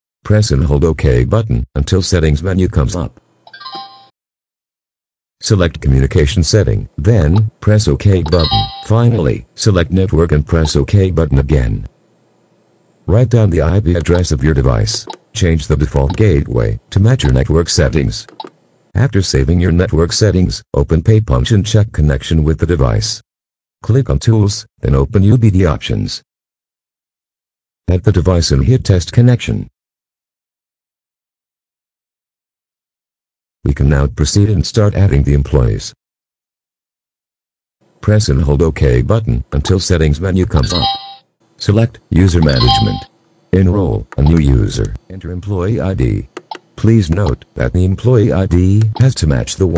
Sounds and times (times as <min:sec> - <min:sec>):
Speech: 0:00.2 - 0:03.2, 0:05.4 - 0:11.9, 0:13.1 - 0:18.3, 0:19.0 - 0:23.2, 0:23.8 - 0:26.3, 0:27.9 - 0:29.7, 0:33.6 - 0:36.0, 0:38.0 - 0:49.7.